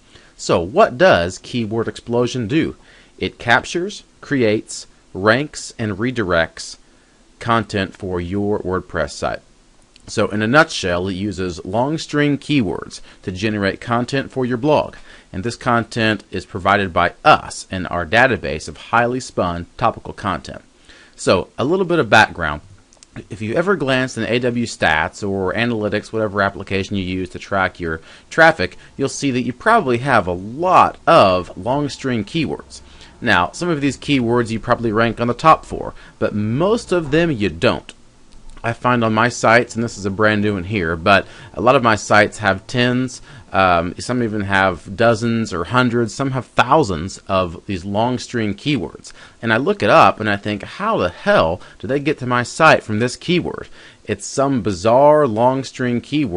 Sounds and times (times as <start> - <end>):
Speech: 0.4 - 6.8, 7.4 - 38.0, 38.6 - 56.3.